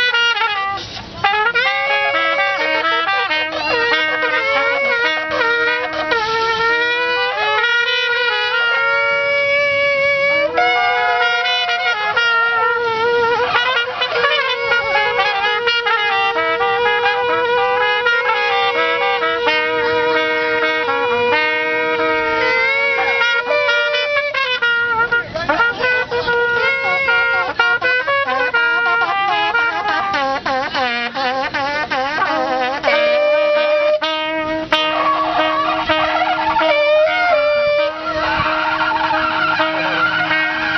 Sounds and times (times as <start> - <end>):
Shofar: 0.0 - 40.7
Wind instrument, woodwind instrument: 0.0 - 40.7.